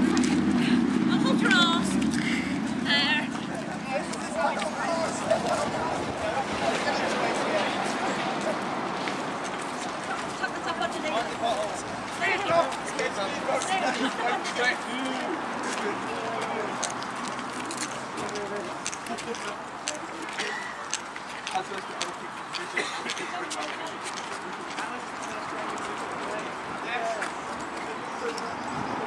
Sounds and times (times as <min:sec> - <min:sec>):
Walk, footsteps: 0:15.1 - 0:26.5.